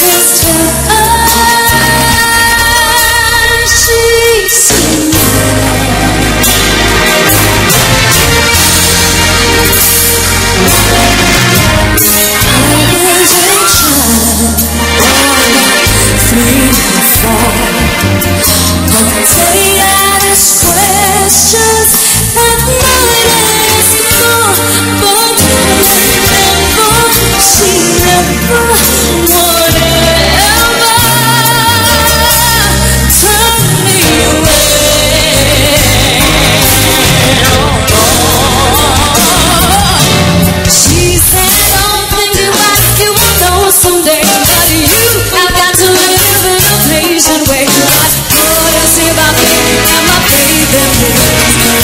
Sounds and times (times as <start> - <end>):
Rhythm and blues: 0.0 - 51.8.